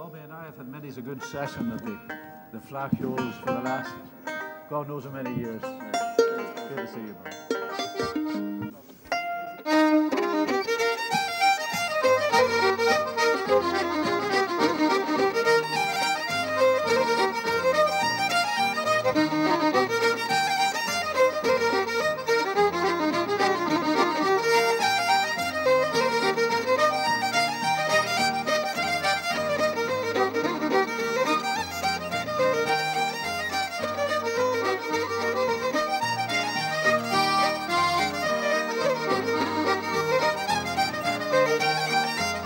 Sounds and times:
Music: 0.5s - 42.4s.

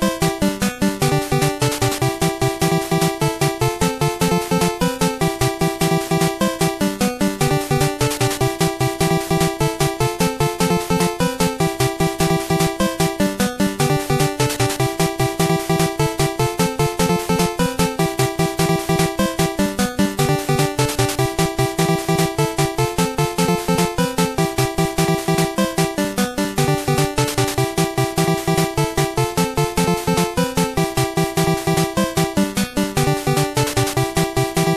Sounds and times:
Happy music: 0.0s - 34.7s.

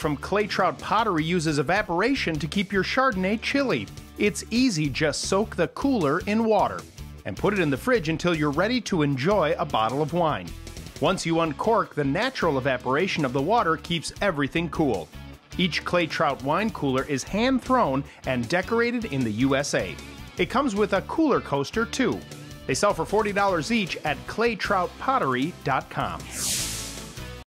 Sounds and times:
Speech: 0.0s - 26.4s
Music: 0.0s - 27.4s.

